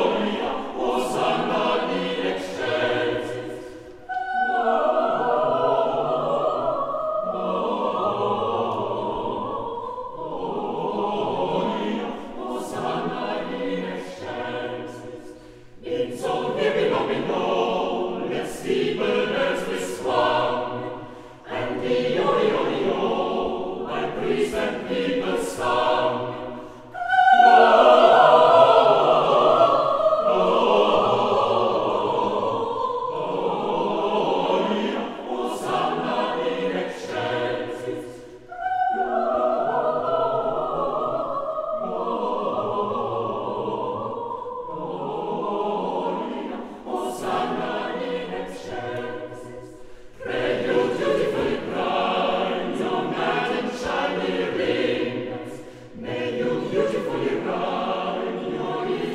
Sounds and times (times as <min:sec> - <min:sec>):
Music: 0:00.0 - 0:59.1.